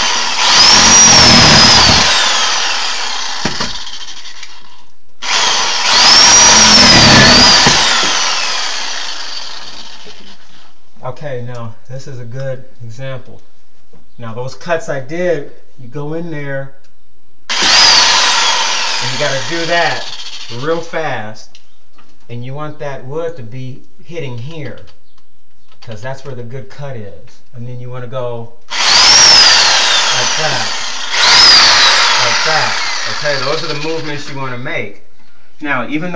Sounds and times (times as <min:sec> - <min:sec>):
Speech: 0:11.0 - 0:13.4, 0:14.2 - 0:16.8, 0:19.0 - 0:21.6, 0:22.3 - 0:24.9, 0:25.8 - 0:28.6, 0:30.1 - 0:30.7, 0:32.2 - 0:35.0, 0:35.6 - 0:36.1.